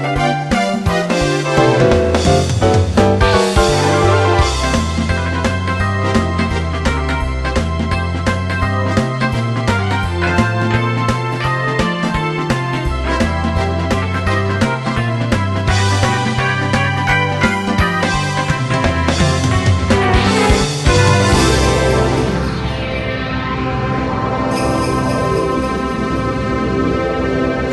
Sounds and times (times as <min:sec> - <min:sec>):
Rhythm and blues: 0:00.0 - 0:27.7.